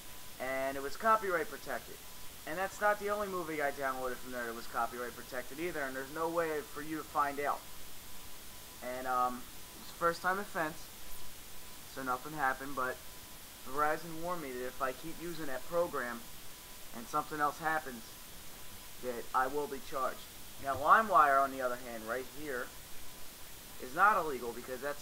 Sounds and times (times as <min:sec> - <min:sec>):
Speech: 0:00.4 - 0:07.6, 0:08.8 - 0:10.9, 0:11.9 - 0:13.0, 0:13.7 - 0:16.2, 0:17.0 - 0:18.1, 0:19.0 - 0:22.7, 0:23.8 - 0:25.0.